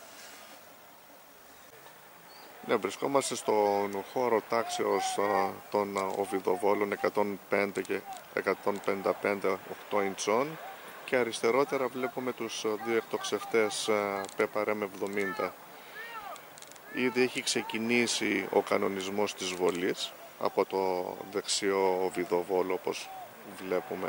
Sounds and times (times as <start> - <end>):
Speech: 2.6 - 24.0.